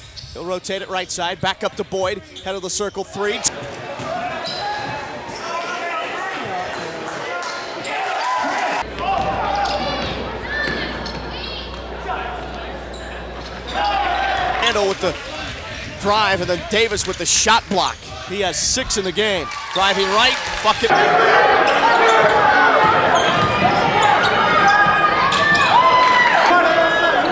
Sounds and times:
Basketball bounce: 0:09.0 - 0:11.8
Speech: 0:14.6 - 0:21.0.

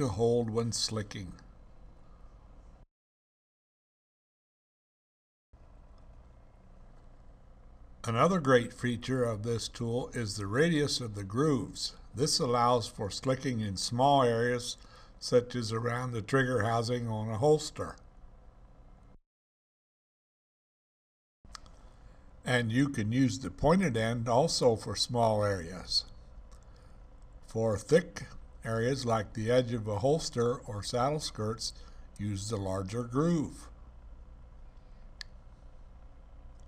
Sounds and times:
Speech: 0:00.0 - 0:01.5, 0:08.0 - 0:18.1, 0:22.5 - 0:26.2, 0:27.5 - 0:33.8.

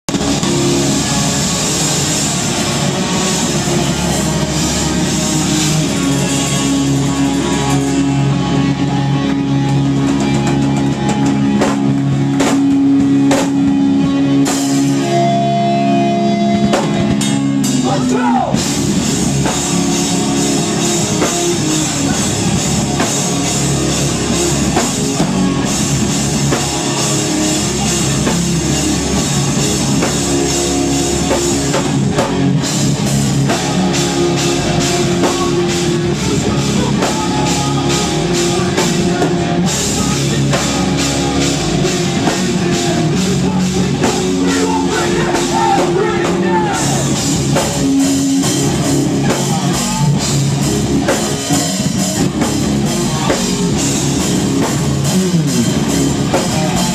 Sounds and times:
Crowd: 0:00.0 - 0:56.9
Drum kit: 0:00.0 - 0:56.9
Guitar: 0:00.0 - 0:56.9
Heavy metal: 0:00.1 - 0:56.9.

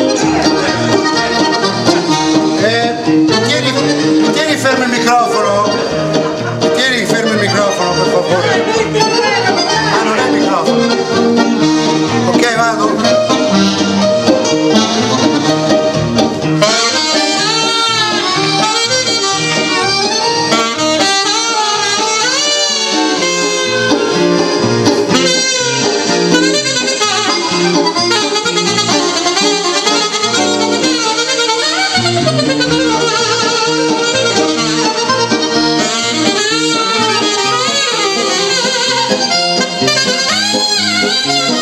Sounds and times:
Saxophone: 0:00.0 - 0:41.6
Speech: 0:06.8 - 0:10.8, 0:12.3 - 0:13.2.

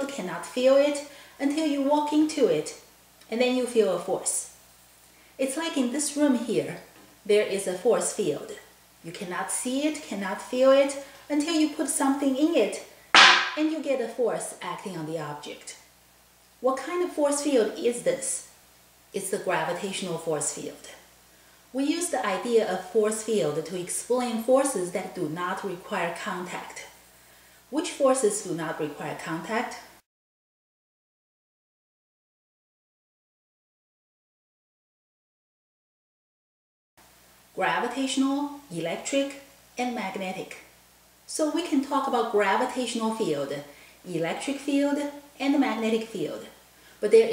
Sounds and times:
Speech: 0:00.0 - 0:04.6, 0:05.4 - 0:12.9, 0:13.6 - 0:15.8, 0:16.6 - 0:18.5, 0:19.2 - 0:21.0, 0:21.8 - 0:27.0, 0:27.7 - 0:29.9, 0:37.6 - 0:40.7, 0:41.3 - 0:47.3.

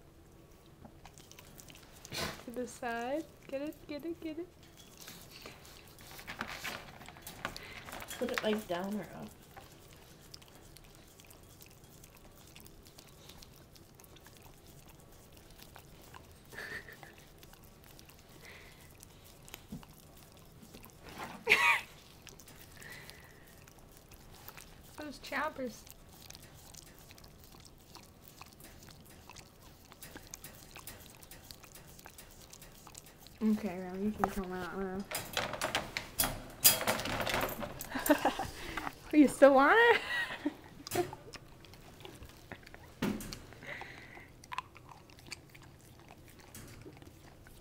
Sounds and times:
Speech: 0:08.2 - 0:09.3, 0:25.0 - 0:25.8, 0:33.4 - 0:35.1, 0:39.1 - 0:40.0.

